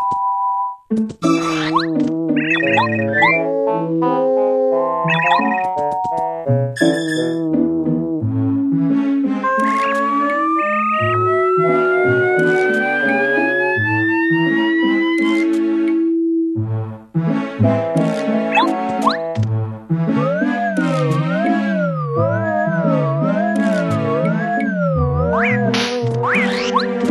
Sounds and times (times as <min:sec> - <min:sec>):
Music: 0:00.0 - 0:27.1.